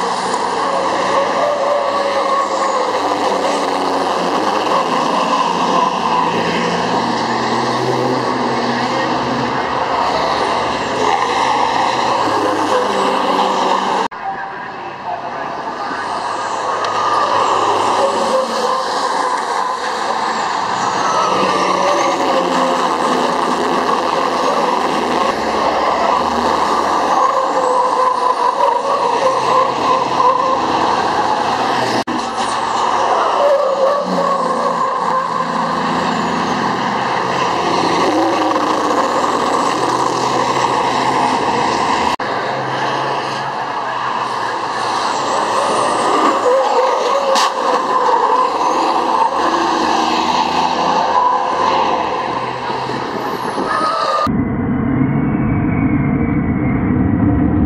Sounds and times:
Truck: 0.0 - 57.6.

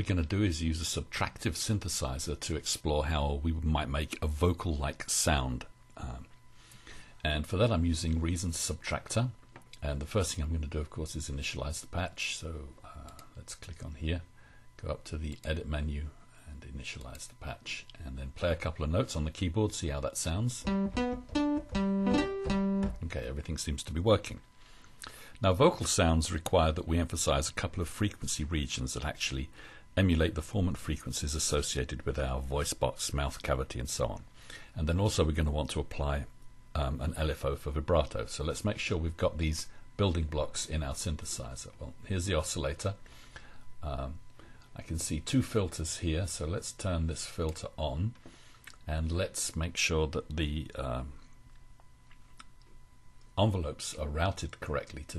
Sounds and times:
Speech: 0.0 - 6.4, 7.2 - 20.7, 22.9 - 24.4, 25.4 - 43.0, 43.8 - 44.2, 44.8 - 48.2, 48.8 - 51.2, 53.4 - 55.1
Music: 20.6 - 23.1.

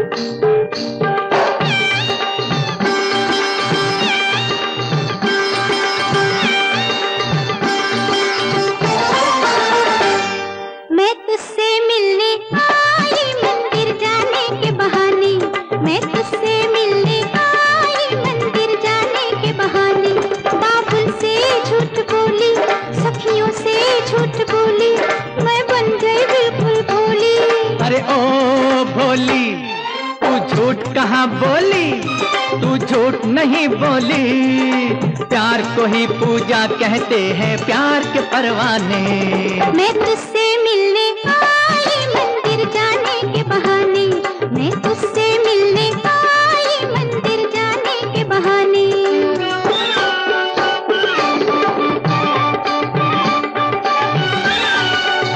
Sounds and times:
Music of Bollywood: 0.0 - 55.3
Sitar: 0.0 - 55.3.

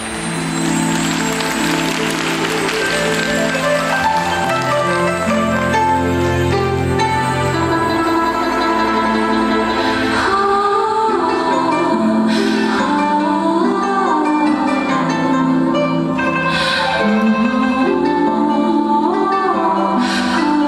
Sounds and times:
Percussion: 0.0 - 18.3.

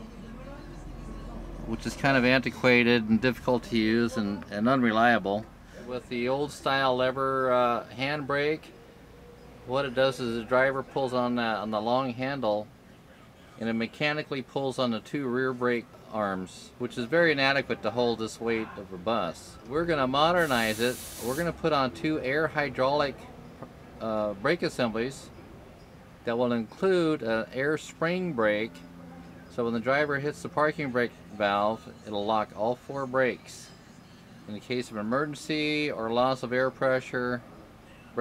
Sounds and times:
Speech: 0.0 - 8.7, 9.7 - 23.3, 24.0 - 25.3, 26.2 - 33.7, 34.5 - 37.4.

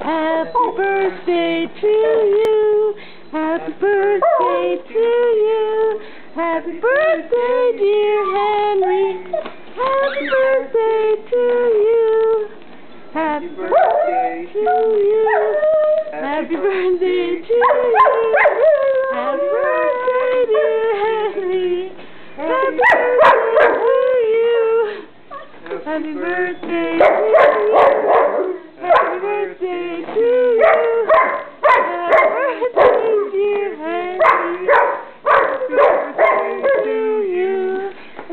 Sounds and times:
Female singing: 0.0 - 25.1, 25.7 - 38.3.

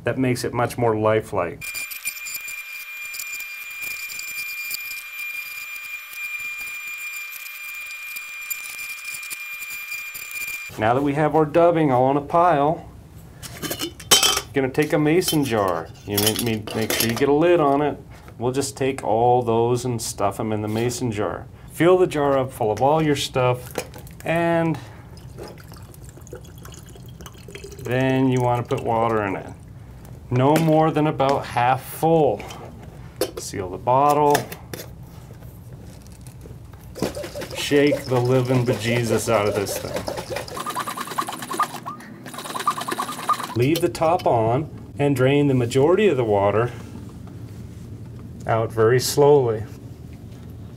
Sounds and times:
Speech: 0.0 - 1.6, 10.7 - 12.9, 14.5 - 23.6, 24.2 - 24.8, 27.9 - 29.6, 30.3 - 32.6, 33.4 - 34.5, 37.6 - 40.0, 43.6 - 46.8, 48.4 - 49.8.

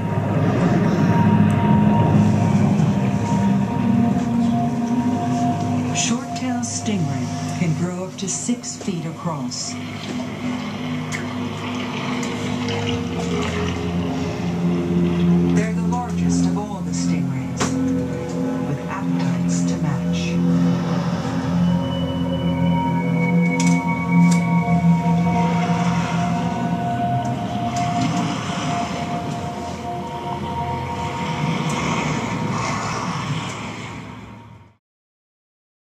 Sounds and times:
Music: 0.0 - 34.8
Television: 2.9 - 21.7
Speech: 6.0 - 9.8, 15.5 - 17.8, 18.6 - 20.4.

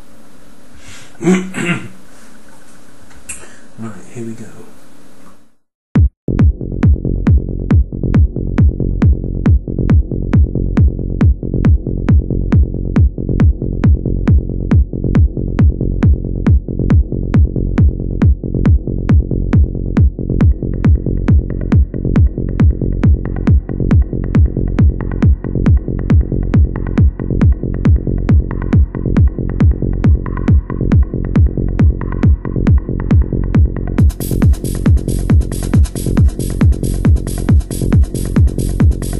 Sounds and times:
Techno: 7.3 - 39.1.

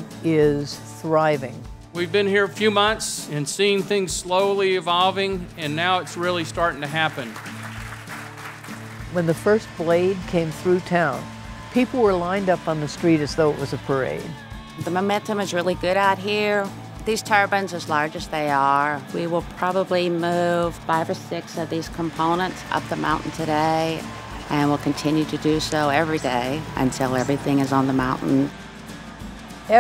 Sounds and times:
Music: 0.0 - 29.8
Speech: 0.2 - 7.3, 11.8 - 28.5.

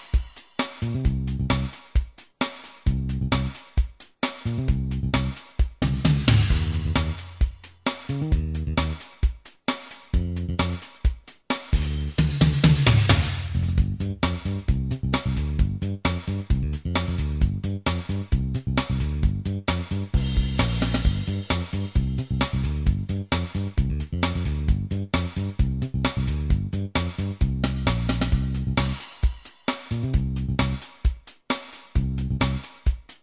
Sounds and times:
Music: 0.0 - 33.2.

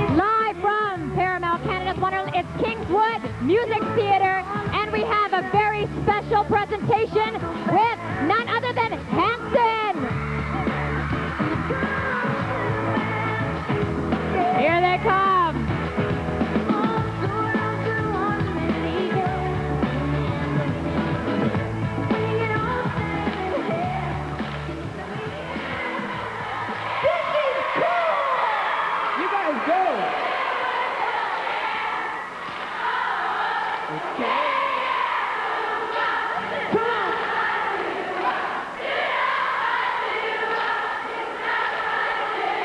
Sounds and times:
Female singing: 0.0 - 10.0, 11.4 - 13.7, 14.3 - 15.6, 16.7 - 26.4
Music: 0.0 - 42.6.

